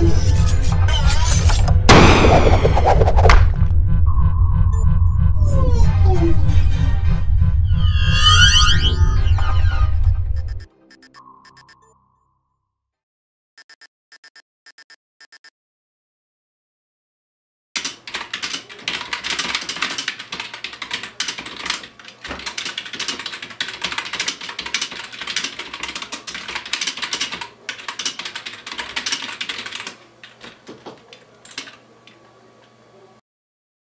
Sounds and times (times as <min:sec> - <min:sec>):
Typewriter: 0:17.8 - 0:31.8.